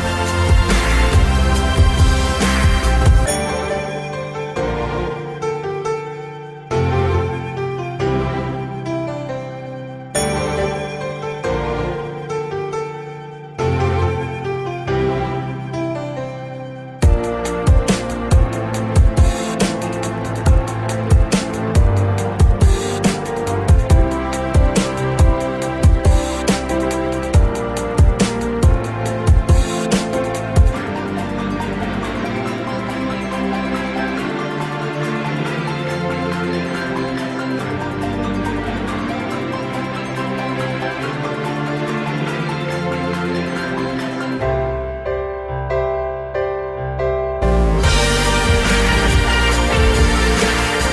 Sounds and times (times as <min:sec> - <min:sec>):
Tender music: 0:00.0 - 0:50.9.